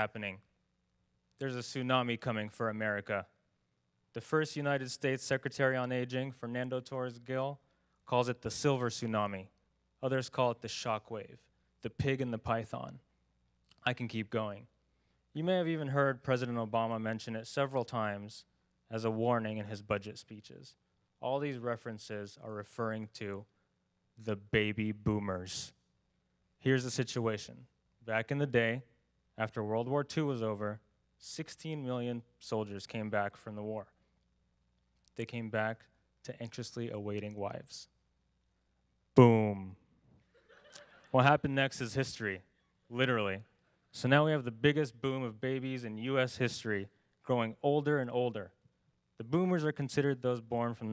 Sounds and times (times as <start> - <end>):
Male speech, man speaking: 0.0 - 0.5, 1.4 - 3.4, 4.1 - 13.0, 13.8 - 14.7, 15.4 - 23.5, 24.2 - 25.8, 26.6 - 33.9, 35.2 - 37.9, 39.2 - 39.8, 41.1 - 48.6, 49.2 - 50.9
Narration, monologue: 0.0 - 50.9.